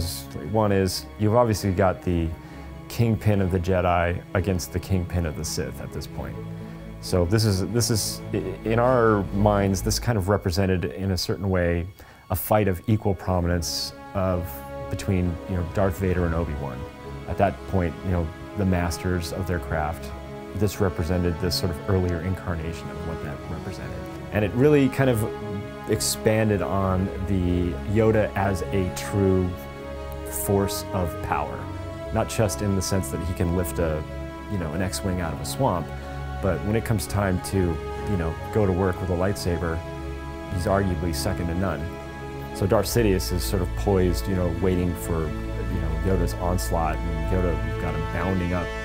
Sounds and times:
Speech: 0.0s - 6.4s, 7.0s - 29.6s, 30.2s - 39.8s, 40.5s - 42.0s, 42.6s - 48.8s
Music: 0.0s - 48.8s.

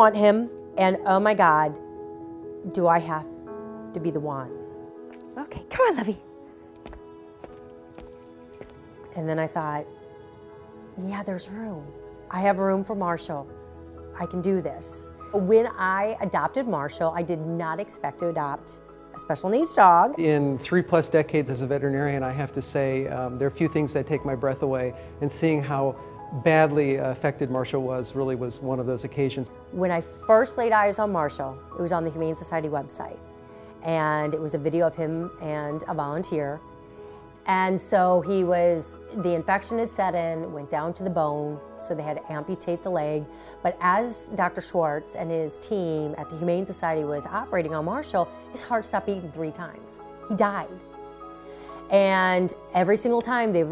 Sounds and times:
Music: 0.0s - 53.7s.

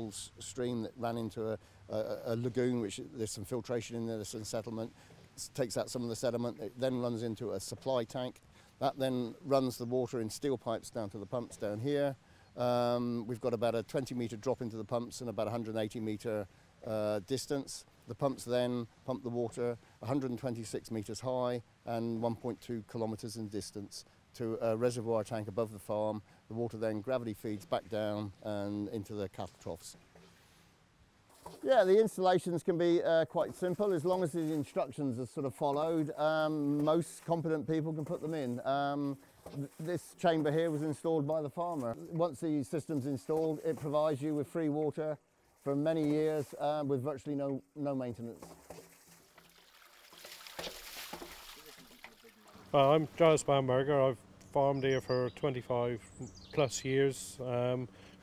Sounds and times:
Speech: 0.0s - 30.0s, 31.5s - 48.5s, 52.1s - 57.9s.

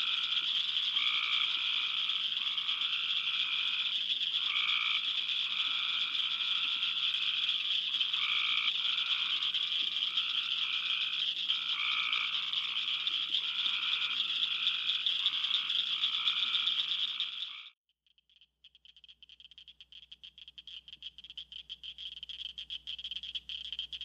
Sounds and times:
Frog: 0.0s - 24.0s.

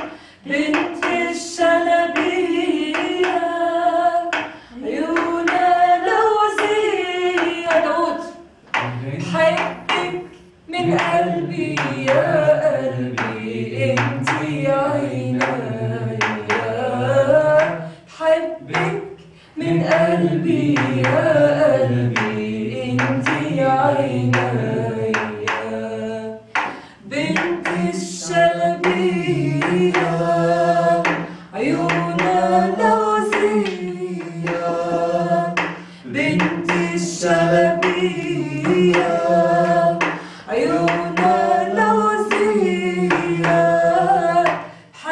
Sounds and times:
Choir: 0.0s - 45.1s
Female singing: 0.4s - 8.5s, 9.2s - 26.4s, 27.0s - 30.2s, 35.4s - 45.1s.

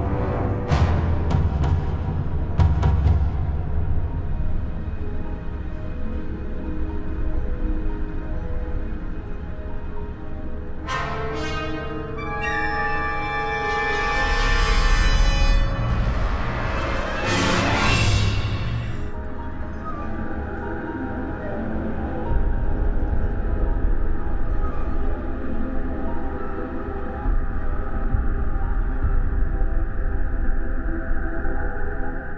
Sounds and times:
Theme music: 10.8s - 22.3s.

